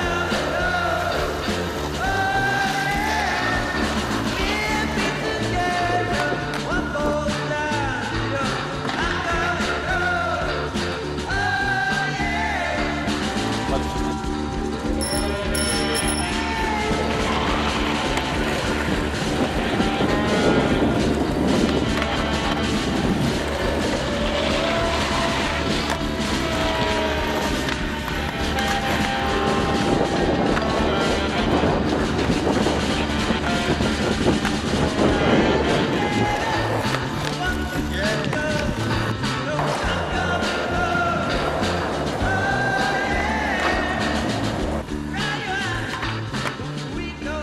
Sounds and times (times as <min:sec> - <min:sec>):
Skateboard: 0:00.0 - 0:47.0
Music: 0:00.0 - 0:47.4
Outside, urban or manmade: 0:00.0 - 0:47.4
Speech: 0:13.6 - 0:14.0.